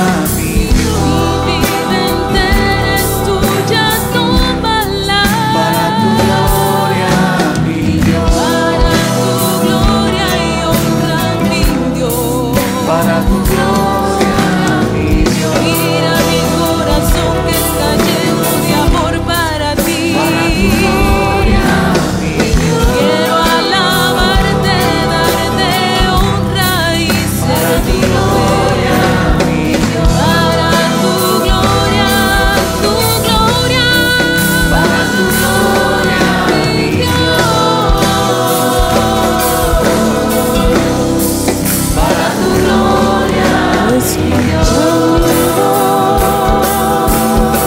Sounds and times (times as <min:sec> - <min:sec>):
Christian music: 0:00.0 - 0:47.6.